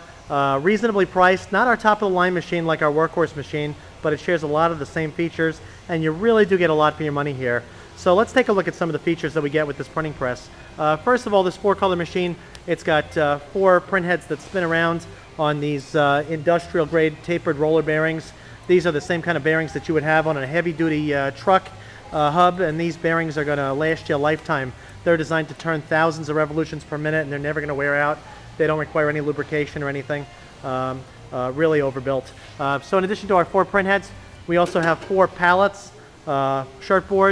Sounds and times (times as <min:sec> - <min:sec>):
Speech: 0:00.3 - 0:37.3.